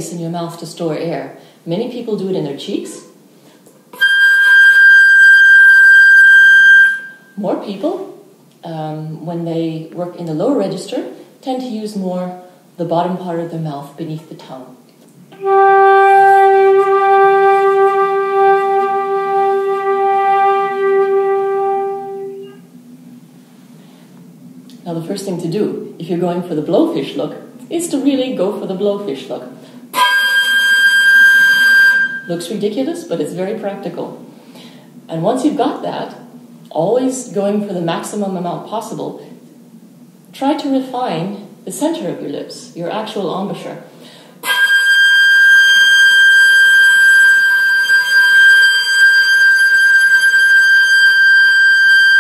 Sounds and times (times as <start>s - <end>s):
Speech: 0.0s - 3.2s, 7.4s - 14.8s, 24.8s - 29.6s, 32.3s - 34.3s, 35.1s - 39.4s, 40.3s - 43.9s
Flute: 4.0s - 7.4s, 15.4s - 22.7s, 29.9s - 32.3s, 44.4s - 52.2s.